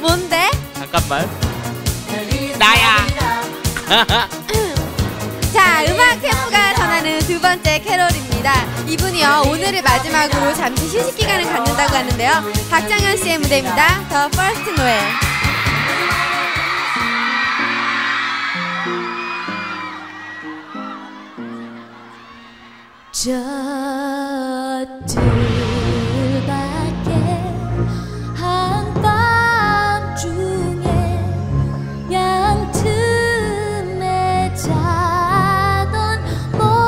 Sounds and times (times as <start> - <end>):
Music: 0.0 - 36.8.